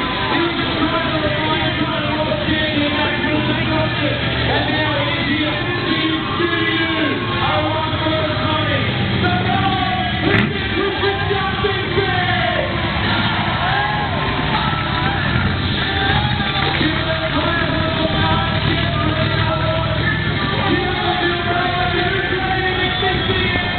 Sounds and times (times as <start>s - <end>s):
Truck: 0.0s - 23.7s
Speech: 0.1s - 12.8s, 15.8s - 23.7s.